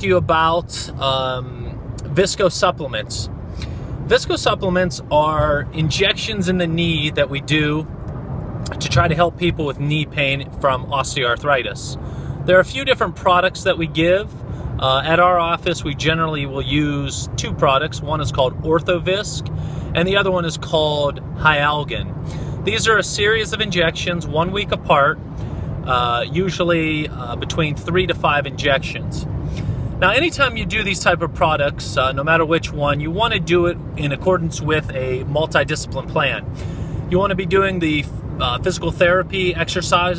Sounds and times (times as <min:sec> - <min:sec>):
Speech: 0:00.0 - 0:03.3, 0:04.1 - 0:07.9, 0:08.7 - 0:22.1, 0:22.7 - 0:25.2, 0:25.9 - 0:29.2, 0:30.0 - 0:36.4, 0:37.1 - 0:40.1.